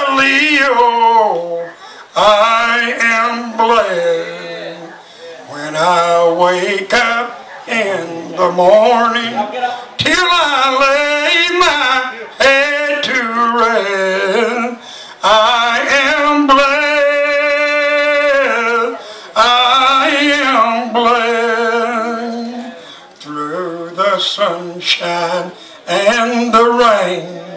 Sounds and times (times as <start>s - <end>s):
Male singing: 0.0s - 27.5s.